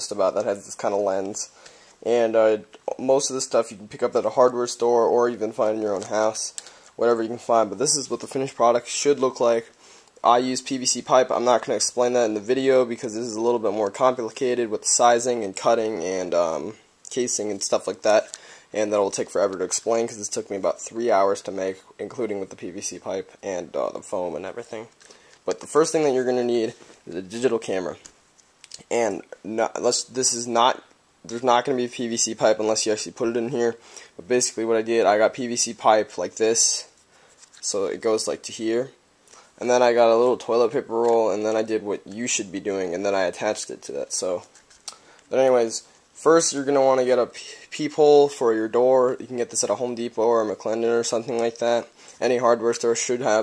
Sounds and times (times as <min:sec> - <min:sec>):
Speech: 0:00.0 - 0:28.1, 0:28.7 - 0:39.0, 0:39.6 - 0:44.5, 0:45.3 - 0:53.4.